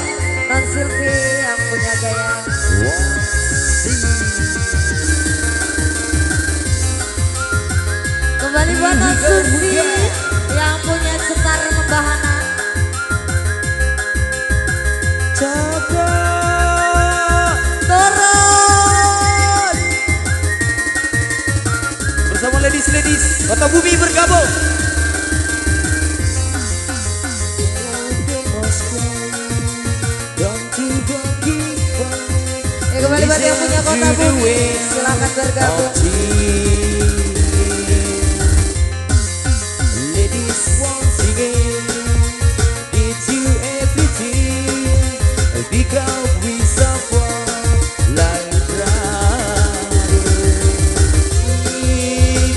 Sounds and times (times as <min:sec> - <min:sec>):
Happy music: 0:00.0 - 0:52.5.